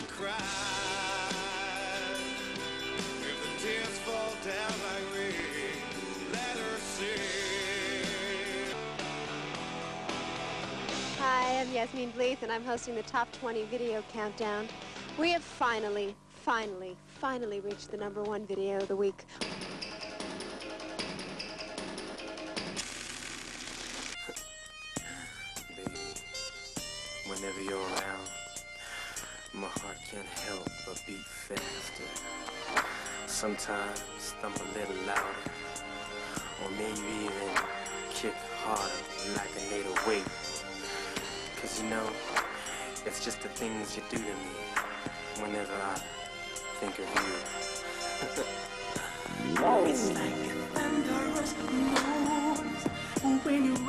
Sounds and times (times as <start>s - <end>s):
Music: 0.0s - 53.8s
Speech: 11.2s - 19.2s, 25.2s - 26.2s, 27.3s - 28.3s, 29.5s - 32.2s, 33.3s - 35.4s, 36.6s - 37.6s, 38.2s - 40.4s, 41.6s - 42.2s, 43.1s - 44.6s, 45.4s - 46.0s, 46.8s - 47.4s, 49.4s - 50.5s.